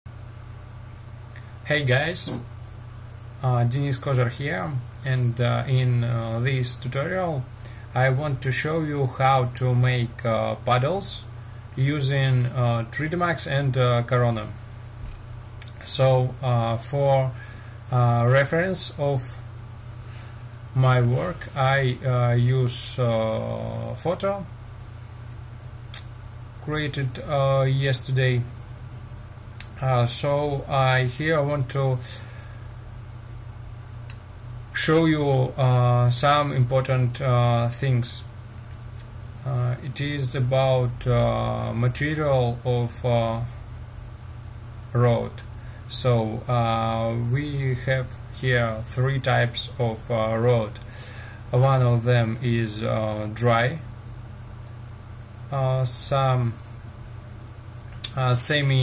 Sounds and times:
Speech: 1.6 - 2.5, 3.4 - 14.6, 15.6 - 19.5, 20.8 - 24.5, 26.6 - 28.5, 29.6 - 32.2, 34.7 - 38.3, 39.4 - 43.6, 44.9 - 50.9, 51.5 - 53.9, 55.5 - 56.6, 58.0 - 58.8.

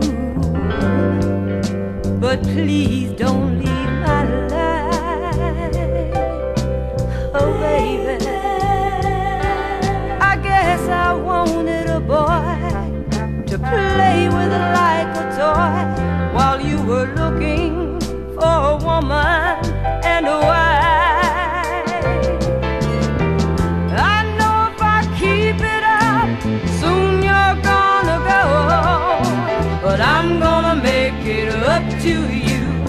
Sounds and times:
Soul music: 0.0 - 32.8.

